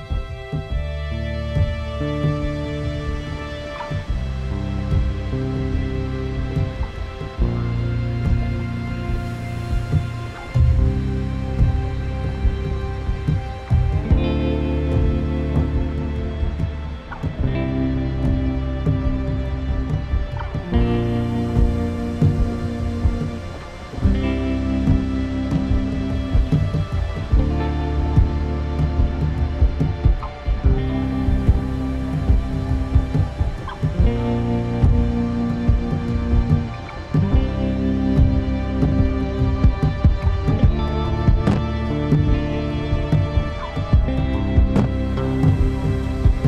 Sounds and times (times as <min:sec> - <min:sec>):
Music: 0:00.0 - 0:46.4.